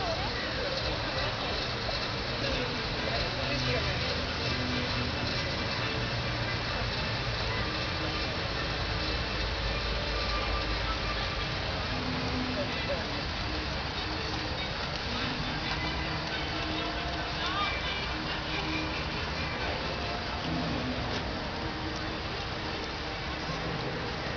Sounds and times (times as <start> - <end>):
Music: 0.0 - 24.3.